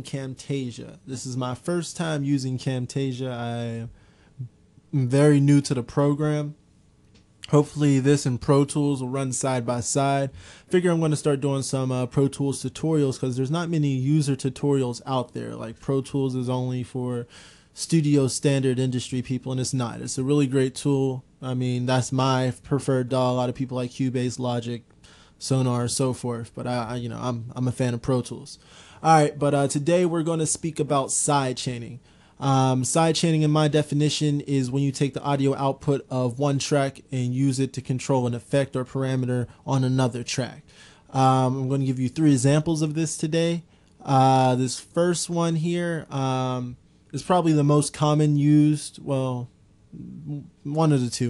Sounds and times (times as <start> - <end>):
Speech: 0.0 - 6.6, 7.4 - 51.2.